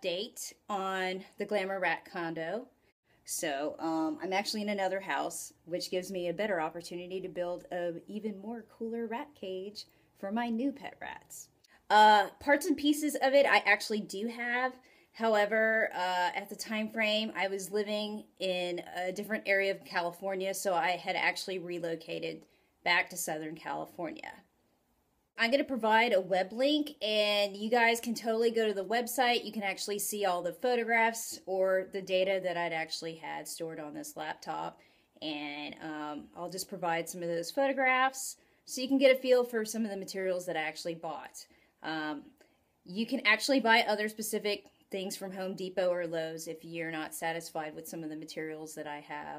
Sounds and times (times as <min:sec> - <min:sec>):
Speech: 0:00.0 - 0:02.7, 0:03.3 - 0:24.5, 0:25.4 - 0:42.3, 0:42.9 - 0:49.3.